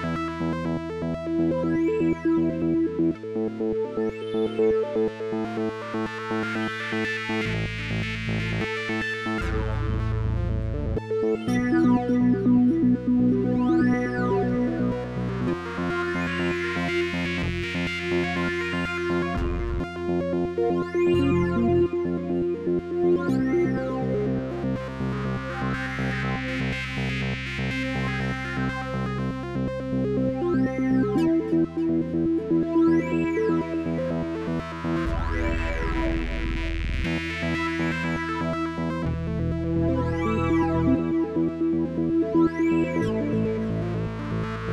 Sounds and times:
Music: 0.0s - 44.7s.

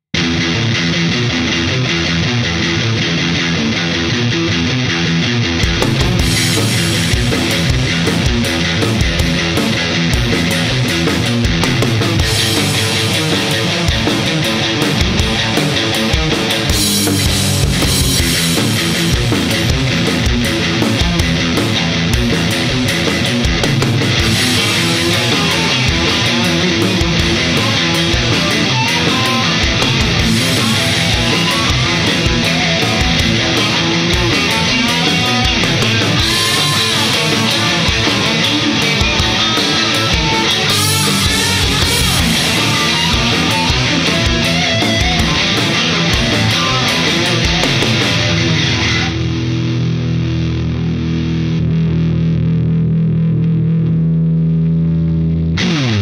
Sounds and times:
Rock and roll: 0.0s - 56.0s.

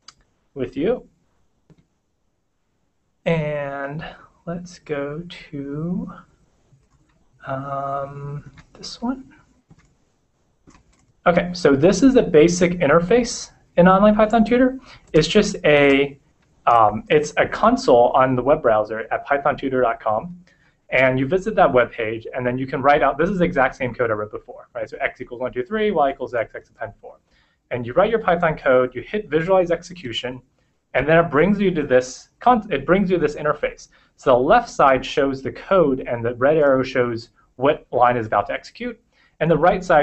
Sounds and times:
Inside, small room: 0.0s - 40.0s
Speech: 0.6s - 1.0s, 3.3s - 6.3s, 7.4s - 9.3s, 11.3s - 30.4s, 31.0s - 40.0s.

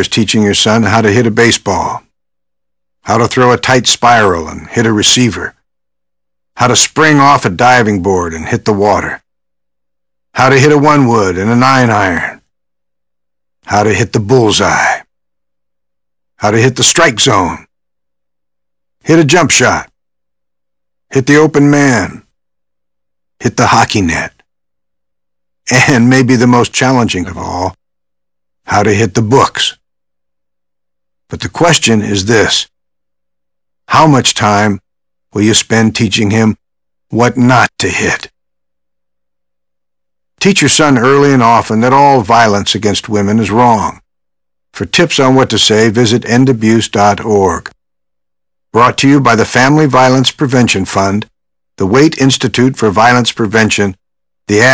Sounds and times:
Speech: 0.0s - 2.0s, 3.1s - 5.6s, 6.6s - 9.2s, 10.4s - 12.4s, 13.7s - 15.1s, 16.4s - 17.7s, 19.0s - 19.9s, 21.1s - 22.3s, 23.4s - 24.4s, 25.7s - 27.8s, 28.7s - 29.8s, 31.3s - 32.7s, 33.9s - 34.8s, 35.4s - 38.4s, 40.4s - 44.0s, 44.8s - 47.8s, 48.8s - 54.7s.

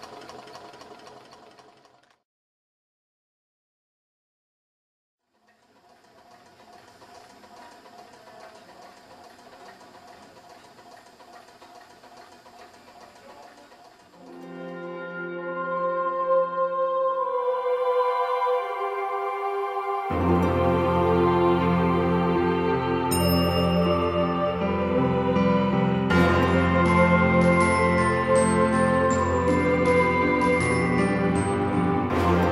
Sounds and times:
Music: 14.2s - 32.5s.

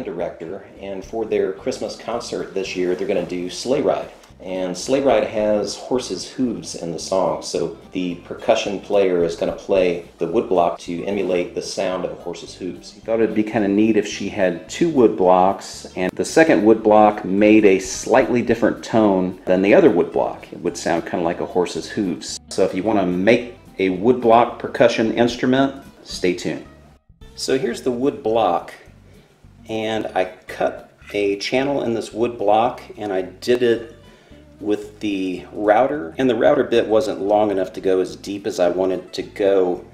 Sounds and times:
Speech: 0.0s - 26.7s, 27.4s - 28.9s, 29.7s - 34.0s, 34.6s - 39.9s
Music: 0.0s - 39.9s.

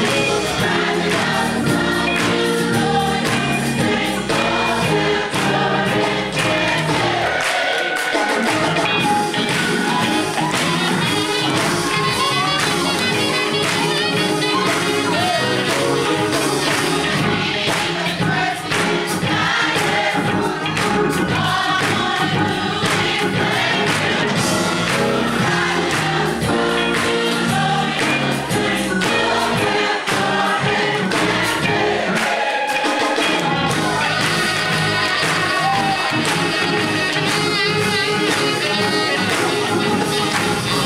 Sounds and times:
Choir: 0.0s - 40.8s.

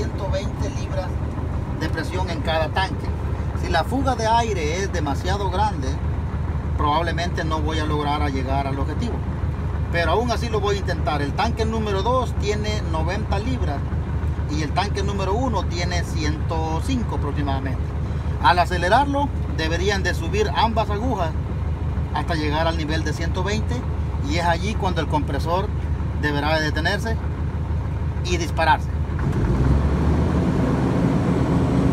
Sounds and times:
Speech: 0.0s - 1.2s, 1.8s - 6.0s, 6.8s - 9.2s, 9.9s - 13.9s, 14.5s - 21.4s, 22.1s - 27.2s, 28.2s - 29.0s
Vehicle: 0.0s - 31.9s.

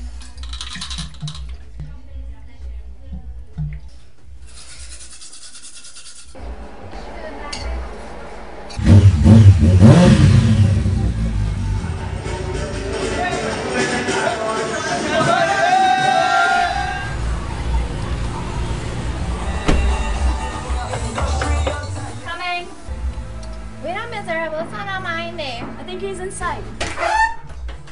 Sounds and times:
Music: 0.0s - 4.6s, 10.4s - 27.9s.

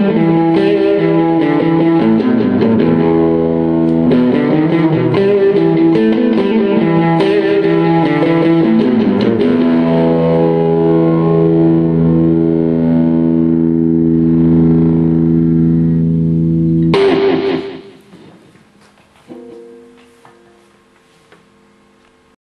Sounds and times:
Music: 0.0s - 18.3s, 19.3s - 20.9s.

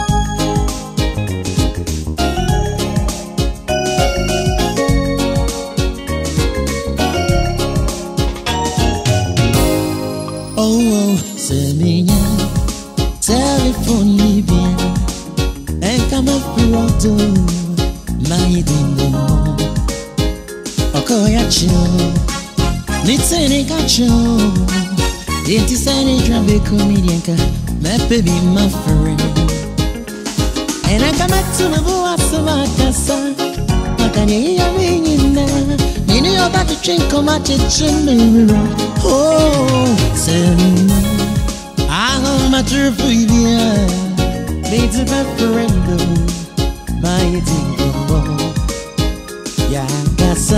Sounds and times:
Music: 0.0s - 50.5s.

